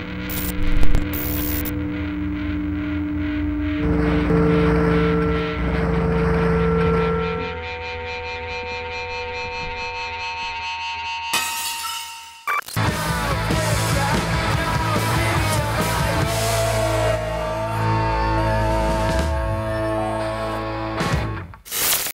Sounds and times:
Music: 0.0s - 11.4s, 12.0s - 21.6s.

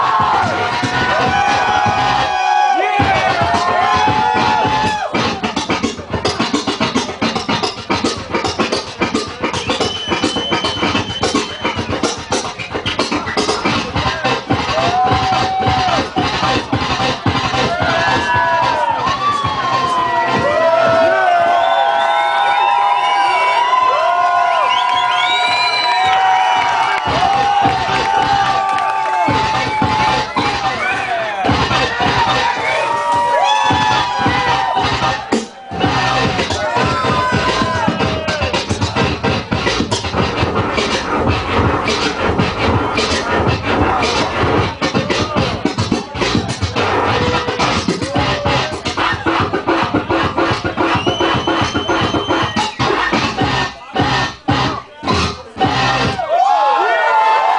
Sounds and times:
Scratching (performance technique): 0.0s - 21.6s, 25.5s - 56.2s.

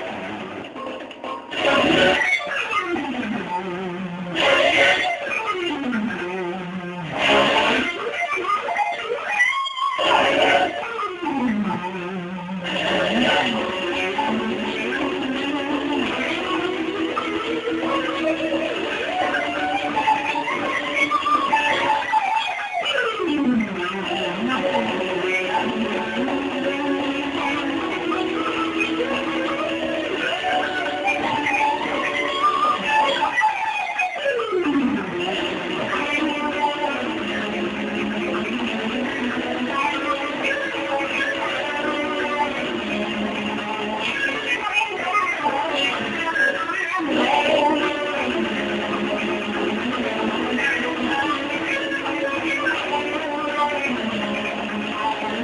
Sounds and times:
Electric guitar: 0.0s - 55.4s
Strum: 0.0s - 55.4s.

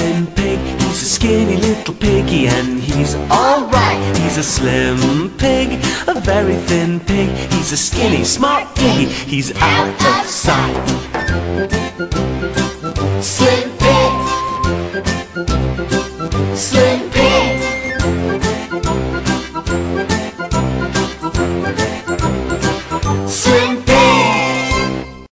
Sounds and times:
Music: 0.0s - 25.3s.

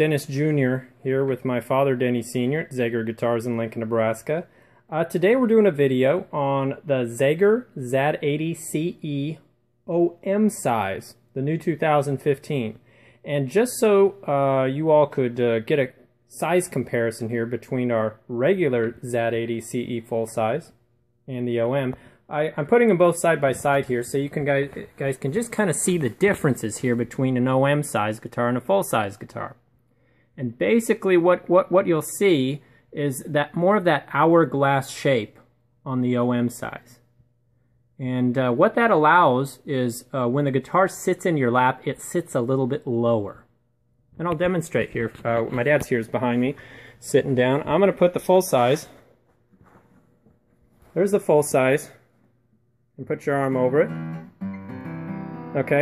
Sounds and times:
Speech: 0.0s - 29.6s, 30.4s - 37.1s, 38.0s - 43.5s, 44.2s - 49.0s, 50.9s - 52.1s, 53.0s - 54.0s, 55.6s - 55.8s.

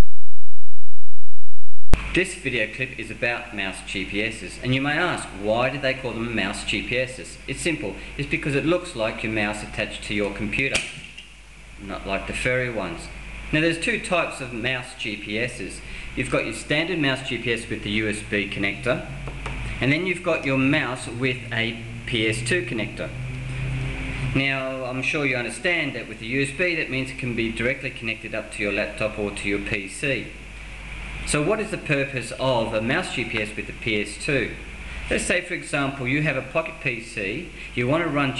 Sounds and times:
Speech: 2.1s - 11.0s, 11.8s - 19.2s, 19.8s - 23.2s, 24.4s - 30.4s, 31.3s - 38.3s.

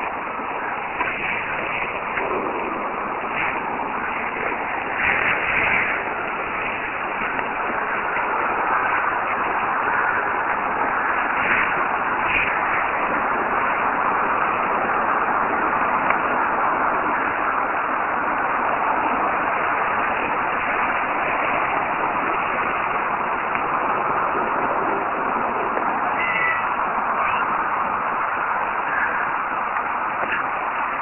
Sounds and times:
Meow: 26.1s - 27.5s.

